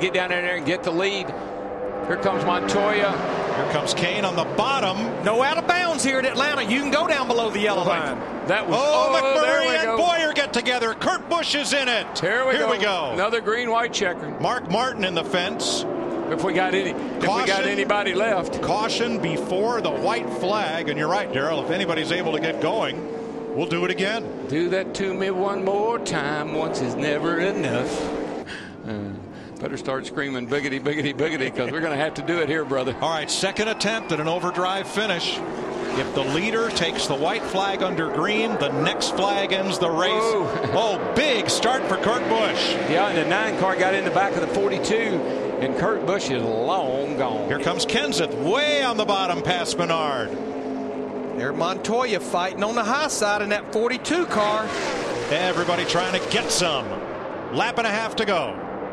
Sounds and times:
Speech: 2.1s - 23.0s, 23.6s - 28.0s, 28.9s - 50.3s, 51.4s - 54.7s, 55.3s - 57.0s, 57.6s - 58.6s.

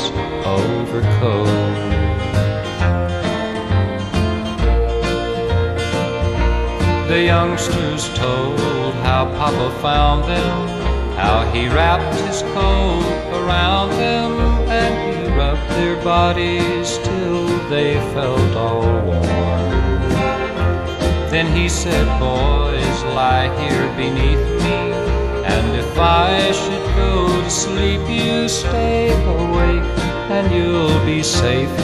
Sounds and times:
Country: 0.0s - 31.8s.

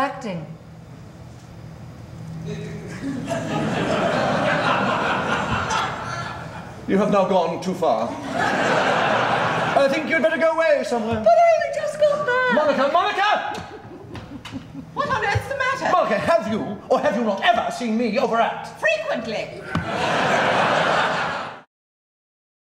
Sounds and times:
Snicker: 2.9s - 6.8s, 8.2s - 9.9s, 12.5s - 15.0s, 19.8s - 21.7s.

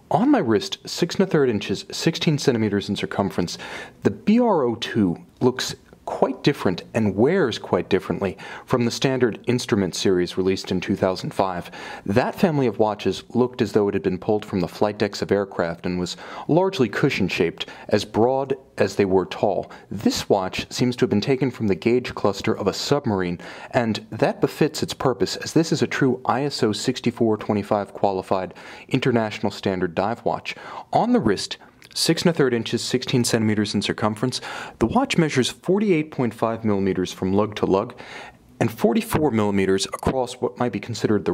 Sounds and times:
Speech: 0.0s - 38.0s, 38.6s - 41.3s.

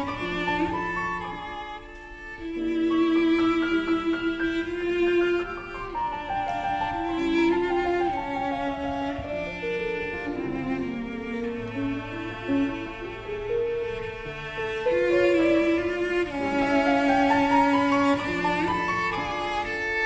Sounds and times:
Violin, fiddle: 0.0s - 20.0s.

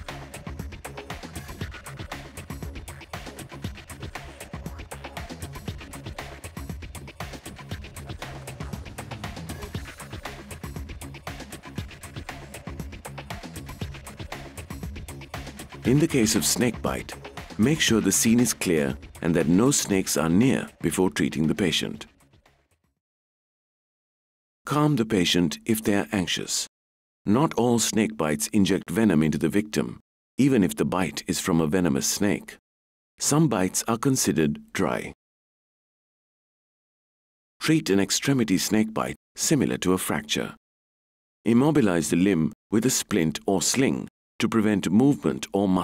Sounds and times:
Music: 0.0s - 23.0s, 38.2s - 40.4s
Speech: 15.8s - 22.1s, 24.7s - 26.7s, 27.3s - 32.6s, 33.2s - 35.2s, 37.6s - 40.6s, 41.5s - 45.8s.

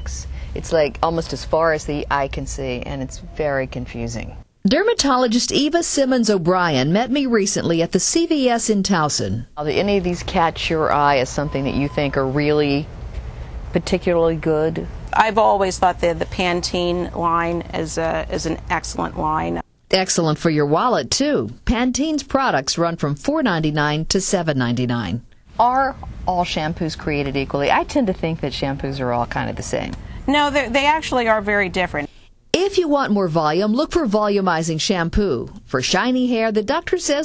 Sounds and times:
Conversation: 0.0s - 37.2s.

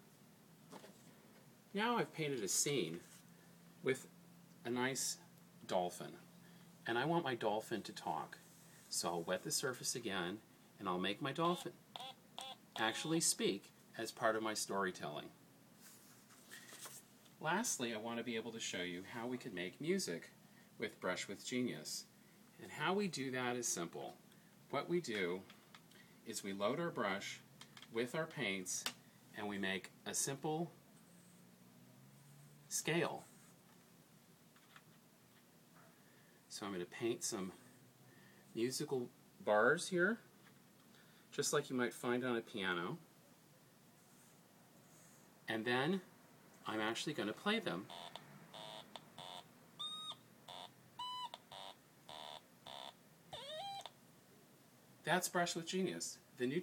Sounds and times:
Speech: 1.7s - 3.1s, 3.8s - 6.2s, 6.8s - 11.8s, 12.8s - 15.4s, 17.4s - 25.5s, 26.3s - 30.8s, 32.7s - 33.3s, 36.5s - 37.6s, 38.6s - 40.3s, 41.3s - 43.0s, 45.5s - 47.9s, 55.0s - 56.6s.

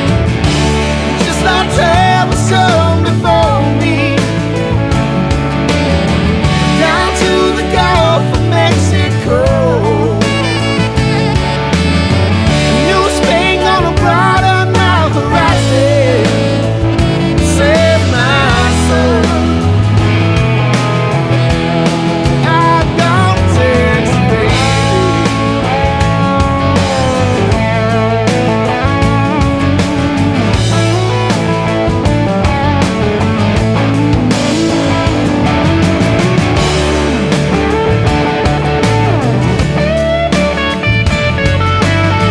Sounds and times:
Music: 0.0s - 42.3s.

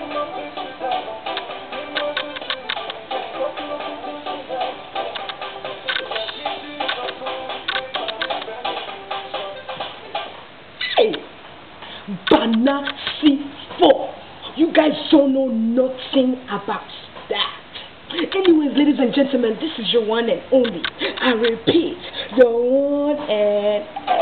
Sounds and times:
Music: 0.0s - 10.4s
Inside, small room: 0.0s - 24.2s
Speech: 12.1s - 17.6s, 18.2s - 24.2s.

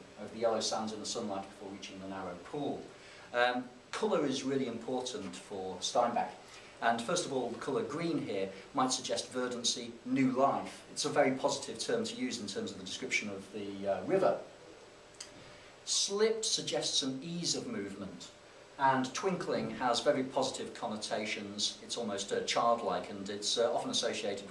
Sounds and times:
Speech: 0.0s - 14.5s, 15.8s - 24.5s.

